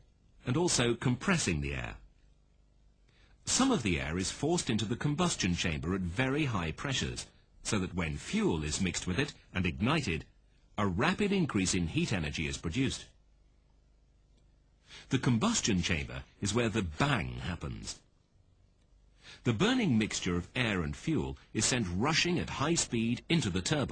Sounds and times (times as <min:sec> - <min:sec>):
Speech: 0:00.4 - 0:02.1, 0:03.4 - 0:13.2, 0:15.0 - 0:18.1, 0:19.4 - 0:23.9.